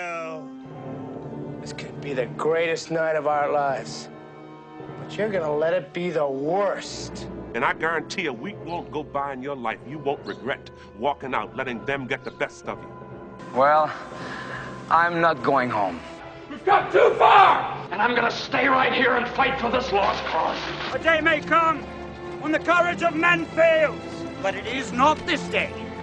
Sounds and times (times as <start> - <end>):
Male speech, man speaking: 0.0 - 0.5, 1.6 - 4.1, 5.1 - 12.9, 13.6 - 14.0, 14.9 - 21.8, 22.4 - 25.8
Music: 0.0 - 26.0
Narration, monologue: 0.0 - 26.0.